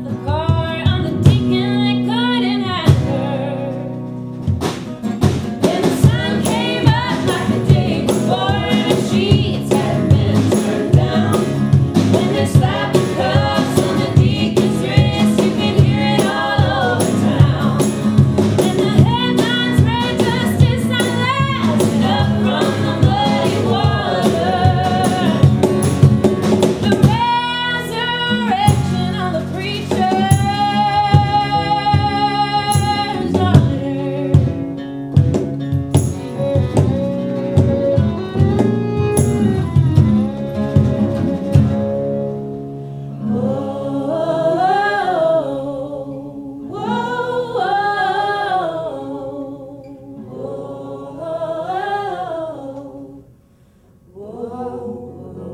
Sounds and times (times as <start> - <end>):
Flamenco: 0.0 - 43.7.